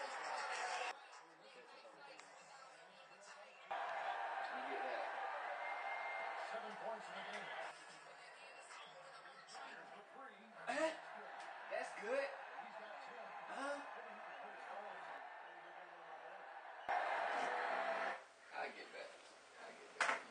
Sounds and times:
Speech: 0.0s - 16.4s.

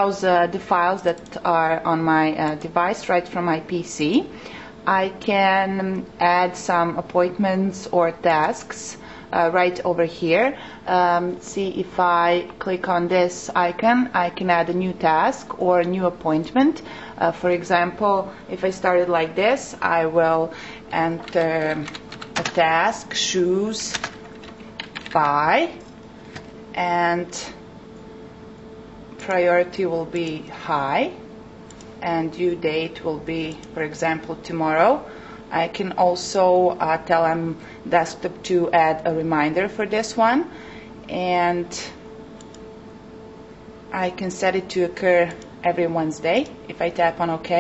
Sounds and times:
Speech: 0.0s - 4.3s, 4.9s - 24.1s, 25.2s - 25.8s, 26.8s - 27.6s, 29.2s - 31.2s, 32.0s - 42.0s, 44.0s - 47.6s.

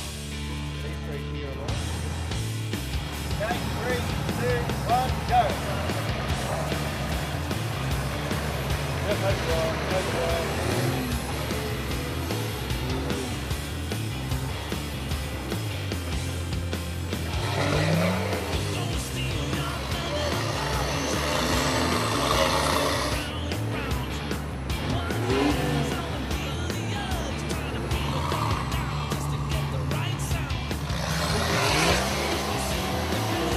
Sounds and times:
Music: 0.0s - 33.5s
Vehicle: 0.0s - 33.5s.

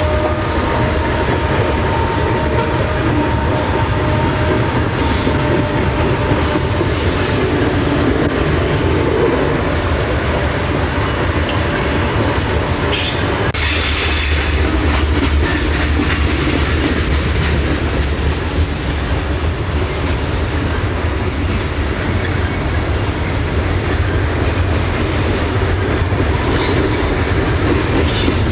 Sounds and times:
Clickety-clack: 0.0s - 9.2s, 10.8s - 28.5s
Railroad car, train wagon: 0.0s - 28.5s
Train: 0.0s - 28.5s.

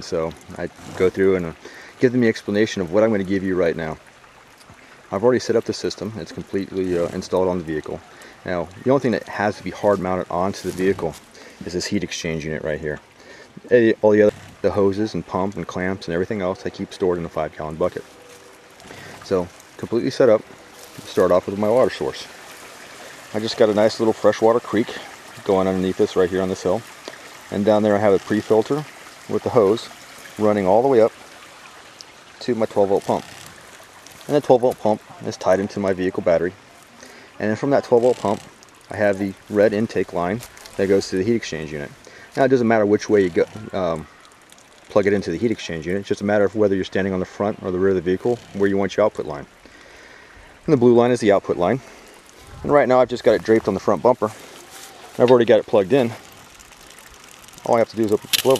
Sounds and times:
Speech: 0.0s - 4.0s, 5.1s - 13.0s, 13.6s - 18.0s, 19.2s - 20.4s, 21.0s - 22.3s, 23.3s - 26.8s, 27.5s - 31.1s, 32.4s - 33.2s, 34.3s - 36.6s, 37.4s - 44.1s, 44.9s - 49.5s, 50.7s - 51.8s, 52.5s - 54.4s, 55.2s - 56.2s, 57.6s - 58.5s.

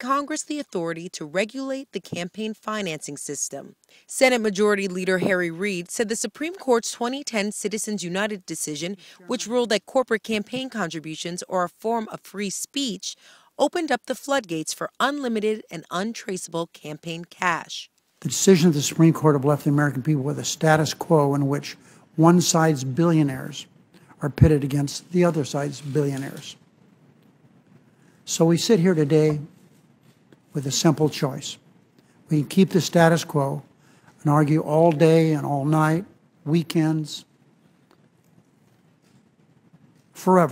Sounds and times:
Speech: 0.0s - 26.6s, 28.3s - 29.5s, 30.6s - 31.6s, 32.3s - 37.3s, 40.2s - 40.5s.

